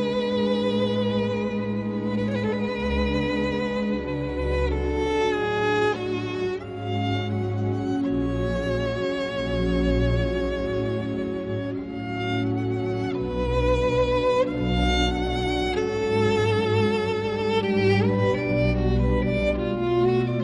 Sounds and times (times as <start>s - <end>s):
Violin, fiddle: 0.0s - 20.4s.